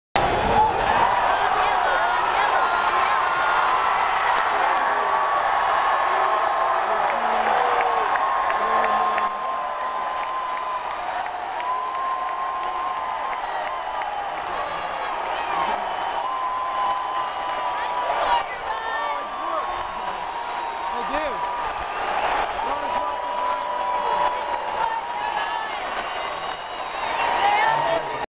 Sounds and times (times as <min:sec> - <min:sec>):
Speech: 0:27.4 - 0:28.2.